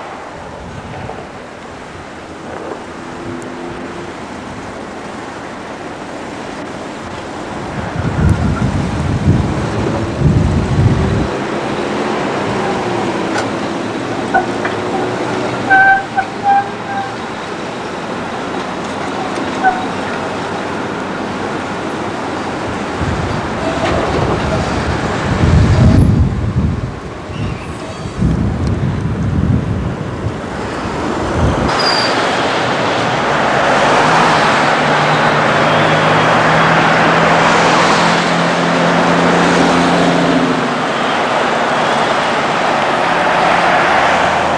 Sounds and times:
Bus: 0.0s - 44.5s
Outside, urban or manmade: 0.0s - 44.5s.

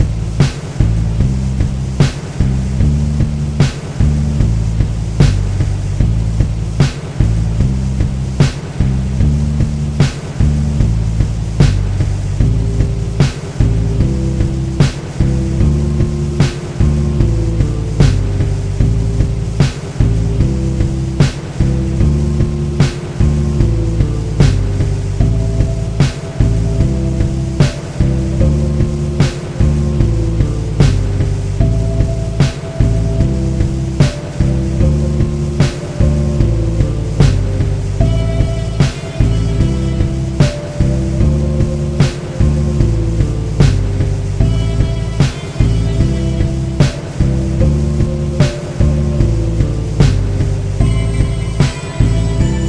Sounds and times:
Music: 0.0s - 52.6s.

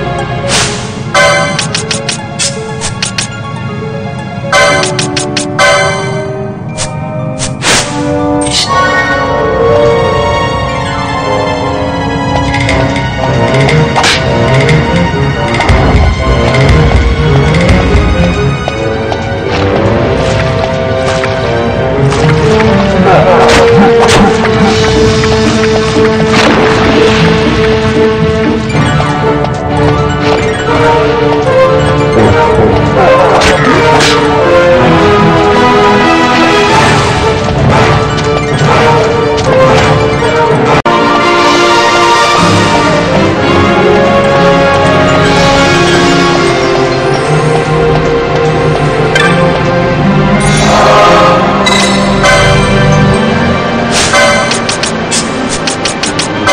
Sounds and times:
Video game music: 0.0s - 56.5s.

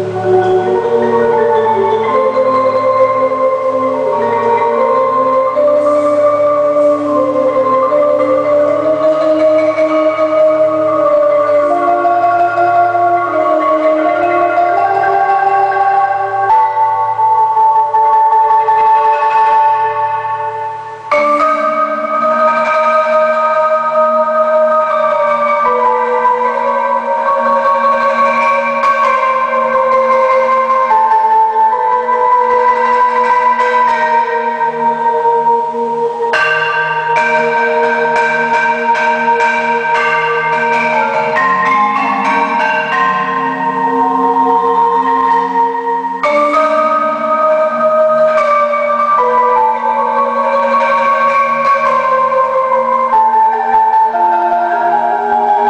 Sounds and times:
Marimba, xylophone: 0.0s - 55.6s.

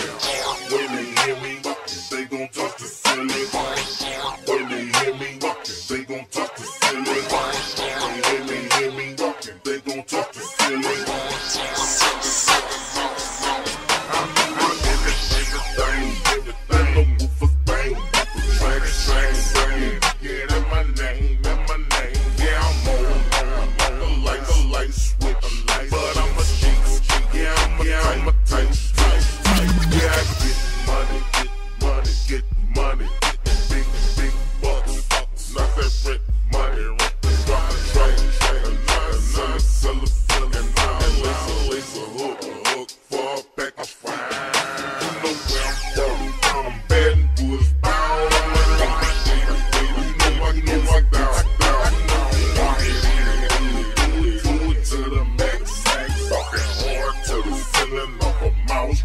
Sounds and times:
Music: 0.0s - 59.0s.

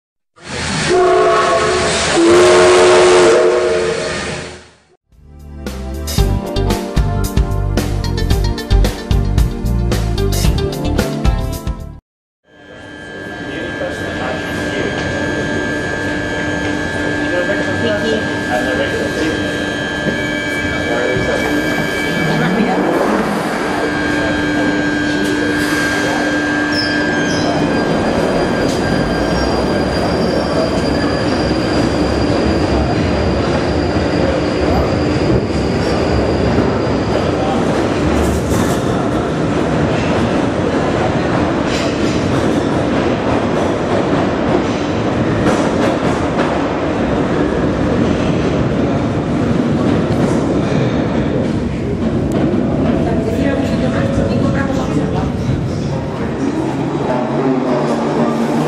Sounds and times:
Train whistle: 0.4s - 4.7s, 12.6s - 32.2s
Music: 5.1s - 12.0s.

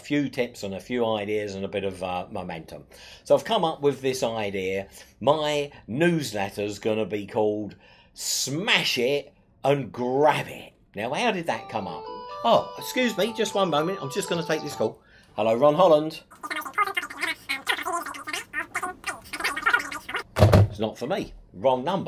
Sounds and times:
Speech: 0.0s - 18.4s, 20.7s - 22.0s.

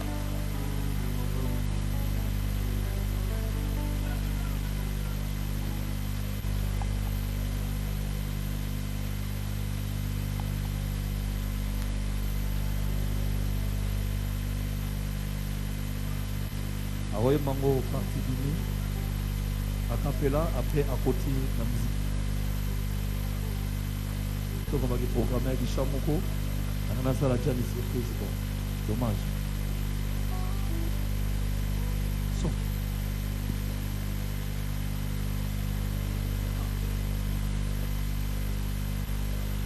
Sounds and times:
Music: 0.0s - 8.0s, 17.5s - 20.8s, 22.6s - 24.7s, 29.7s - 32.7s.

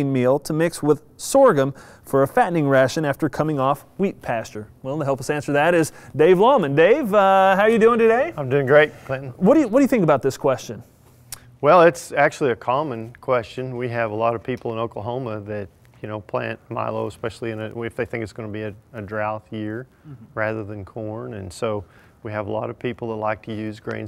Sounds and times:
Speech: 0.0s - 10.8s, 11.6s - 24.0s.

